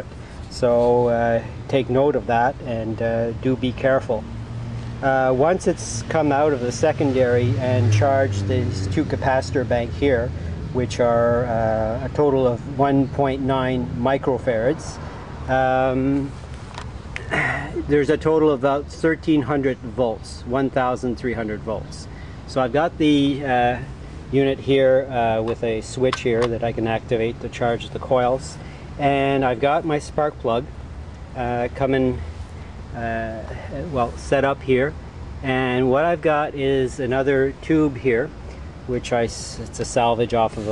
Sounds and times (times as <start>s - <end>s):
Speech: 0.0s - 4.3s, 5.0s - 16.4s, 17.3s - 30.7s, 31.4s - 32.2s, 33.0s - 40.7s.